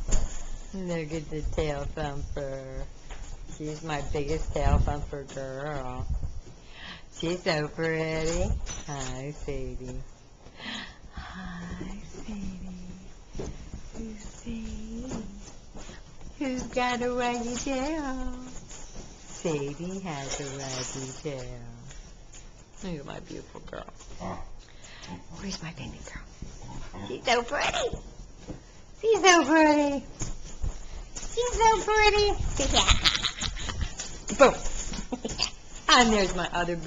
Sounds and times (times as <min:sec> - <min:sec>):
Speech: 0:00.8 - 0:02.9, 0:03.5 - 0:06.1, 0:07.2 - 0:10.1, 0:11.3 - 0:13.1, 0:14.0 - 0:15.4, 0:16.4 - 0:18.6, 0:19.4 - 0:21.9, 0:22.8 - 0:24.0, 0:27.0 - 0:28.0, 0:29.0 - 0:30.1, 0:31.3 - 0:33.0, 0:34.3 - 0:34.6, 0:35.9 - 0:36.8.